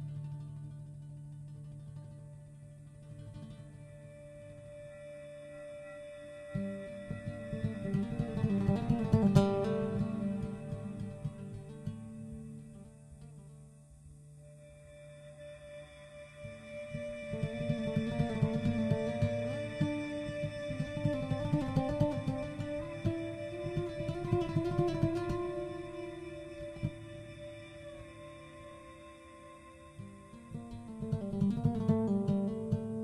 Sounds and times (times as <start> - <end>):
Acoustic guitar: 0.0 - 33.0
Strum: 0.0 - 33.0.